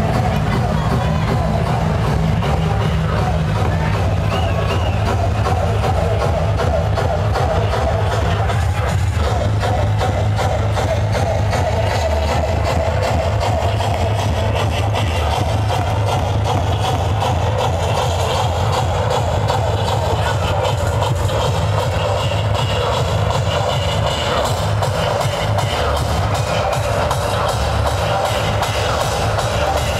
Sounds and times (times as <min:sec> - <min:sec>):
Speech: 0:00.0 - 0:27.1
Music: 0:00.0 - 0:29.9.